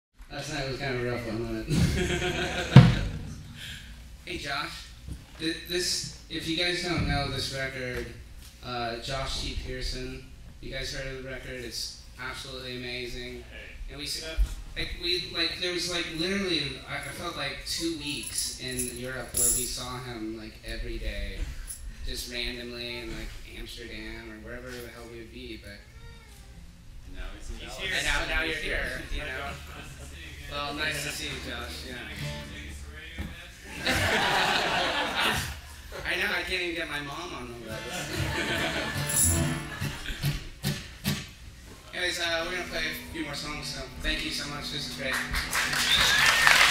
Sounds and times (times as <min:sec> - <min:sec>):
Male speech, man speaking: 0:00.3 - 0:01.8, 0:04.3 - 0:25.9, 0:27.1 - 0:34.0, 0:35.9 - 0:38.1, 0:41.8 - 0:45.4.